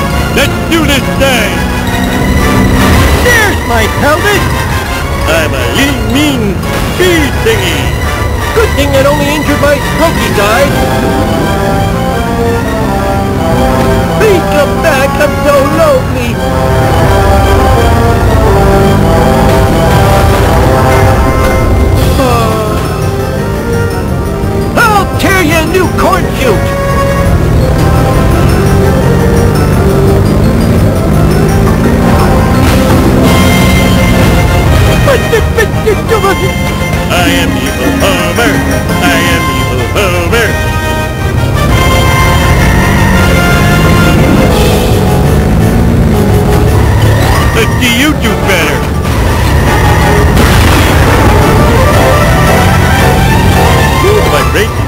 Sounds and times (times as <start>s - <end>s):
Music: 0.0s - 54.8s
Speech: 8.6s - 10.8s, 14.2s - 16.4s, 24.8s - 26.6s, 37.1s - 40.6s, 47.6s - 48.8s, 54.0s - 54.8s.